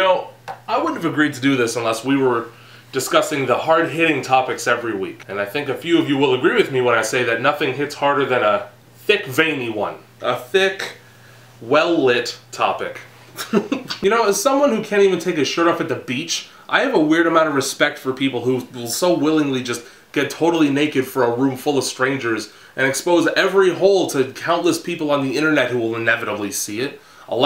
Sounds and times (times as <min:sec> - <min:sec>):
Speech: 0:00.0 - 0:11.0, 0:11.6 - 0:27.4.